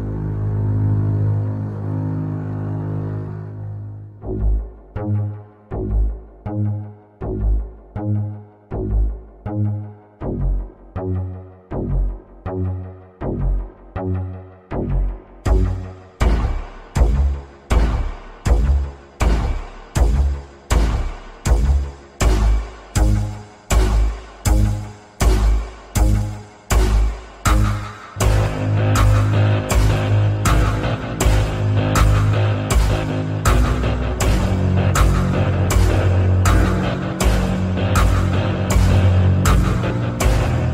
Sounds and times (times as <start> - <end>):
Music: 0.0 - 40.7.